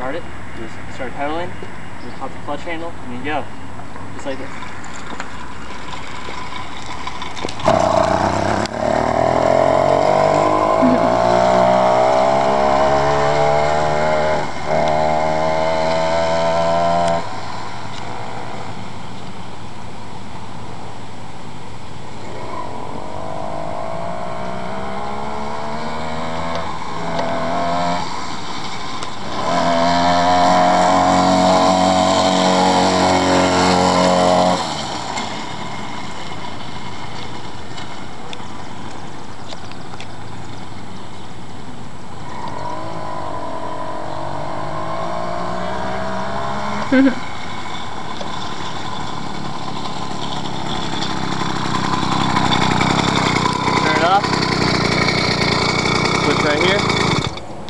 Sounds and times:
Vehicle: 0.0s - 57.6s.

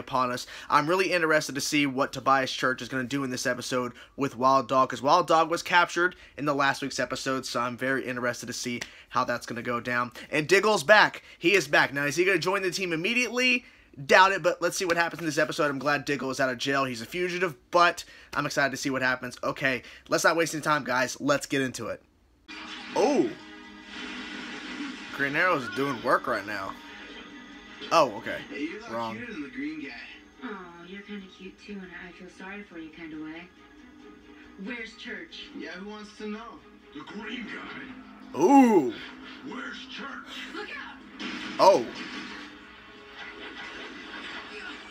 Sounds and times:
Speech: 0.0s - 22.0s
Music: 22.5s - 41.3s.

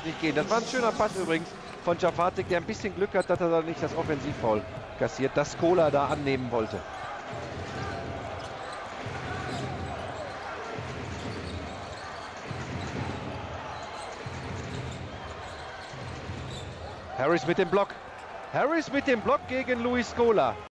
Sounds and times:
Speech: 0.0s - 6.8s, 17.1s - 18.0s, 18.6s - 20.7s.

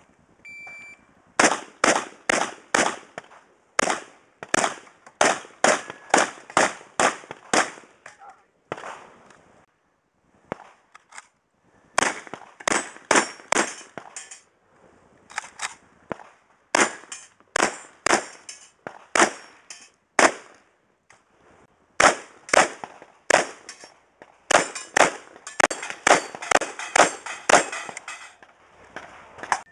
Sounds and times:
Outside, rural or natural: 0.0s - 29.7s
Speech: 8.1s - 8.6s.

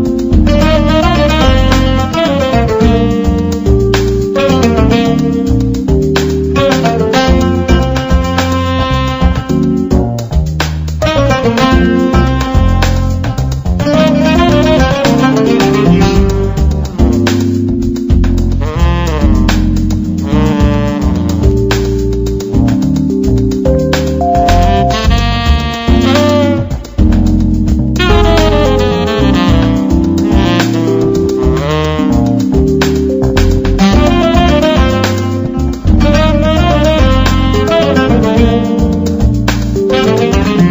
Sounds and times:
Jazz: 0.0s - 40.7s.

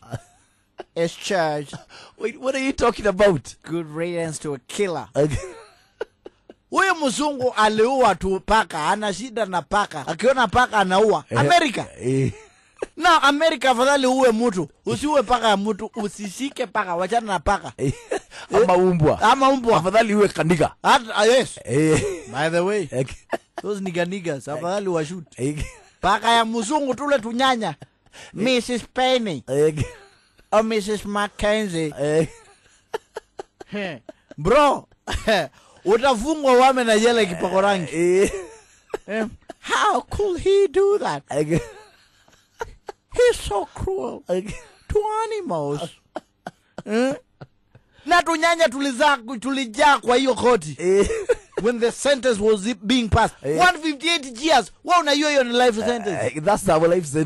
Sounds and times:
Speech: 1.0s - 5.6s, 6.7s - 12.4s, 13.0s - 30.0s, 30.6s - 32.4s, 33.7s - 38.5s, 39.1s - 41.8s, 43.2s - 46.0s, 48.1s - 57.2s.

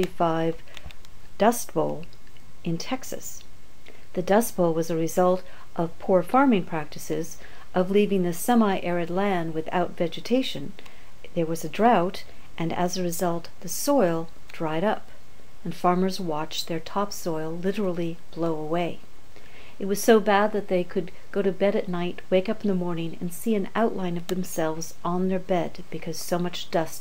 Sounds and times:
Speech: 0.0s - 0.6s, 1.4s - 2.1s, 2.7s - 3.5s, 4.2s - 19.0s, 19.8s - 27.0s.

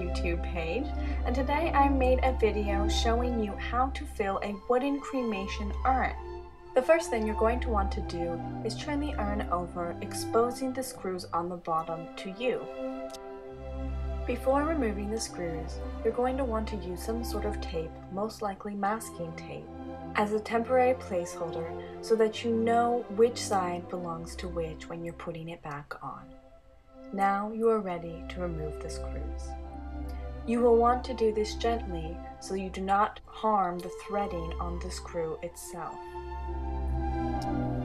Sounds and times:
Speech: 0.0s - 6.2s, 6.8s - 12.7s, 14.3s - 26.2s, 27.1s - 29.5s, 30.5s - 36.0s
Music: 0.0s - 37.8s.

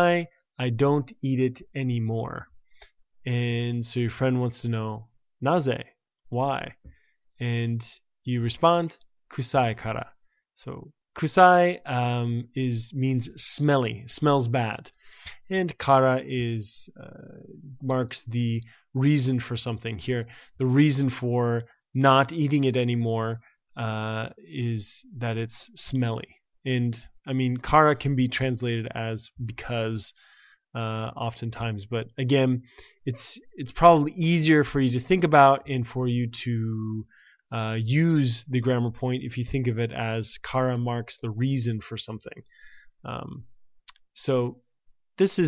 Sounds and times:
Narration, monologue: 0.0s - 45.4s.

